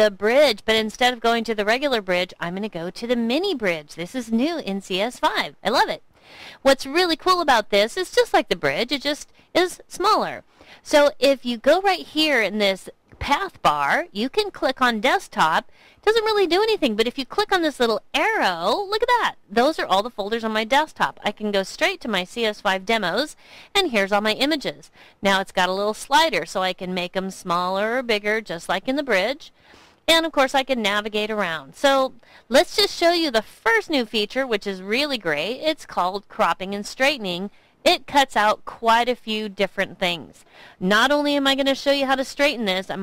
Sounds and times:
Speech: 0:00.0 - 0:06.0, 0:06.6 - 0:29.5, 0:30.1 - 0:43.0.

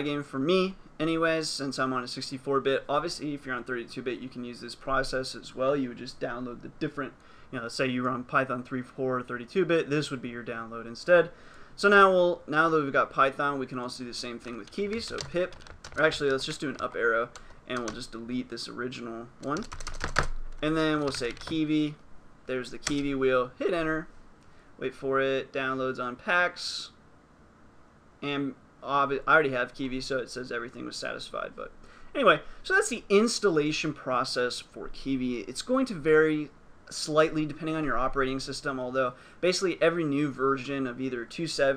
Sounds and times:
Typing: 0:14.4 - 0:18.1, 0:19.4 - 0:21.6.

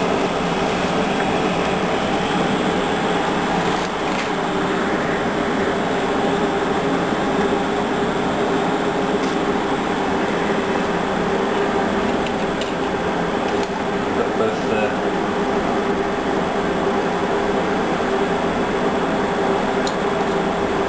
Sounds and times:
Speech: 0:14.2 - 0:15.0.

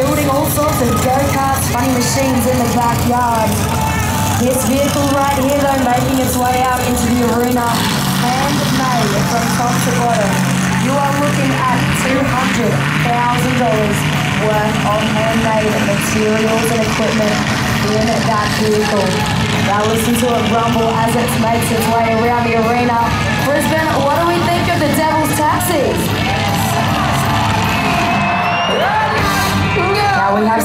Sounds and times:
Speech: 0:00.0 - 0:26.1, 0:29.3 - 0:30.6
Truck: 0:00.0 - 0:30.6.

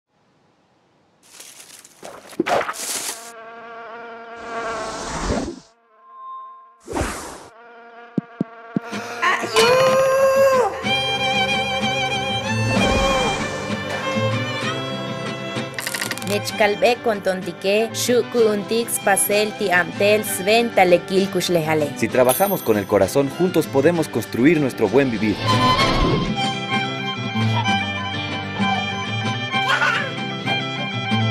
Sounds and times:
Bee, wasp, etc.: 0:01.6 - 0:06.0, 0:06.6 - 0:09.9.

